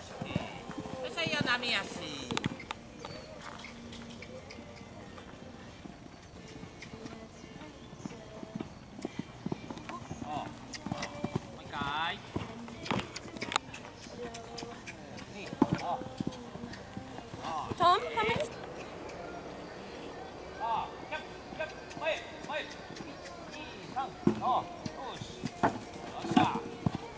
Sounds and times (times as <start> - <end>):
Clip-clop: 0.0 - 27.1.